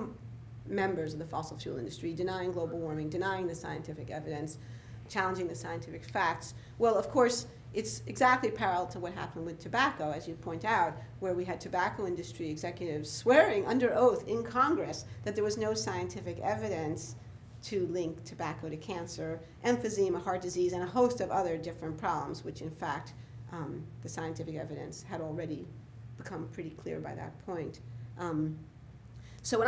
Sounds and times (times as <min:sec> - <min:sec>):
Speech: 0:00.0 - 0:28.7, 0:29.4 - 0:29.6.